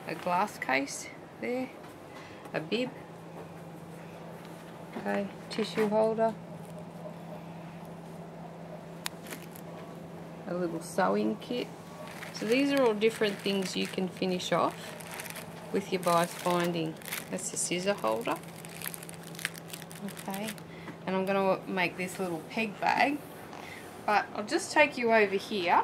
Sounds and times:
Speech: 0.0 - 1.8, 2.6 - 2.9, 5.0 - 6.4, 10.5 - 11.7, 12.4 - 14.8, 15.8 - 18.4, 20.0 - 23.2, 24.1 - 25.8.

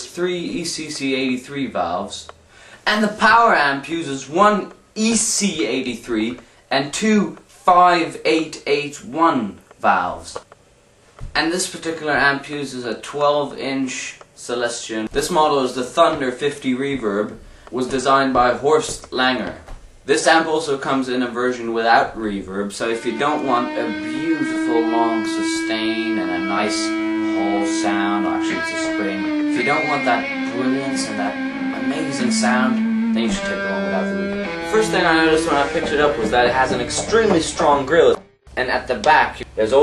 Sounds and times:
Speech: 0.0 - 10.5, 11.3 - 39.8
Guitar: 22.7 - 39.8.

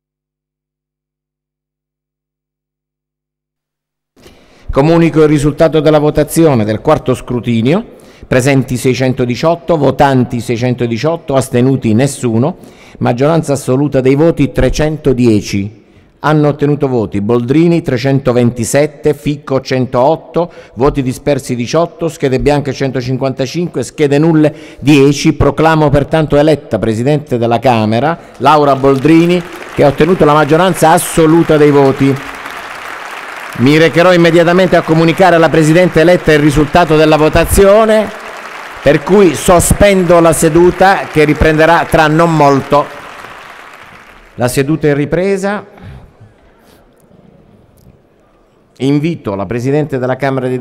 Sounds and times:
Speech: 4.7 - 32.2, 33.6 - 38.2, 38.9 - 42.9, 44.4 - 45.7, 48.8 - 50.6.

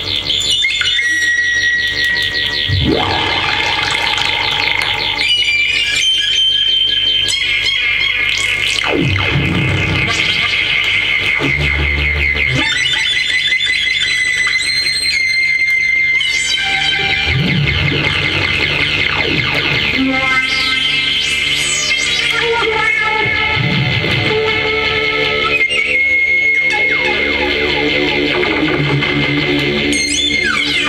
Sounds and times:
Theremin: 0.0 - 30.8.

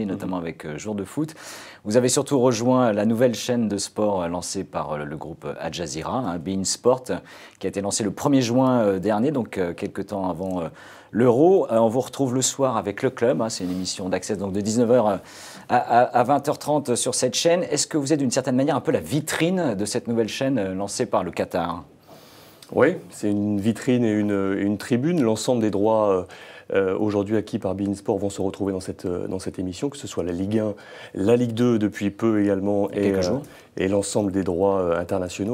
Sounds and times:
Speech: 0.0 - 21.9, 22.7 - 35.5.

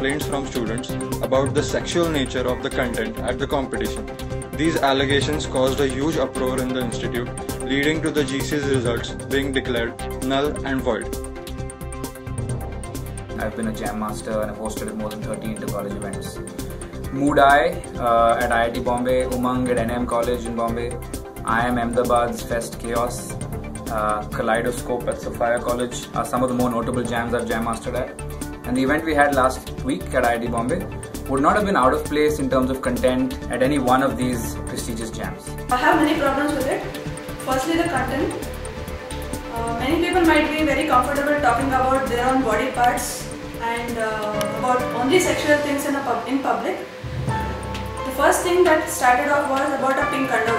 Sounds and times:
Male speech, man speaking: 0.0 - 4.0, 4.6 - 11.1, 13.4 - 16.4, 17.1 - 35.9
Music: 0.0 - 50.5.

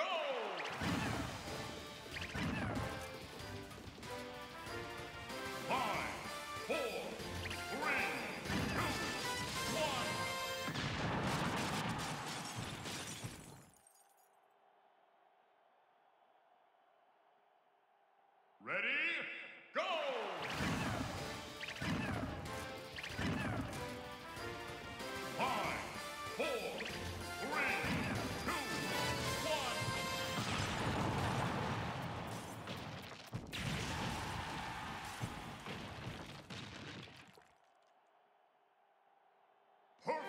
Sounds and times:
Speech: 0.0 - 0.6, 5.7 - 9.0, 9.7 - 10.2, 18.6 - 21.0, 25.4 - 26.8, 27.4 - 28.6, 29.4 - 29.9, 40.0 - 40.2.

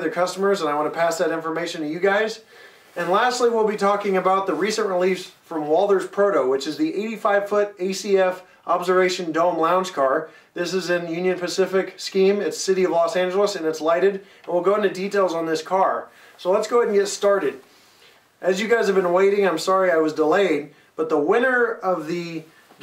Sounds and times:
Speech: 0.0 - 17.6, 18.4 - 22.8.

